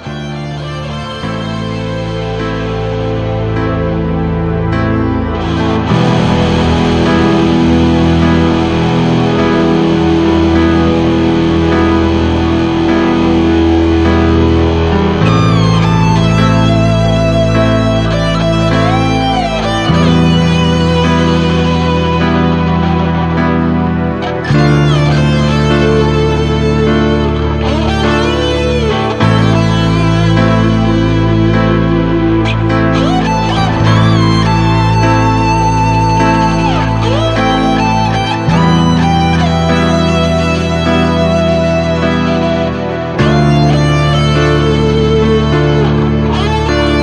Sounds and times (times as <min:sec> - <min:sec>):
Exciting music: 0:00.0 - 0:47.0.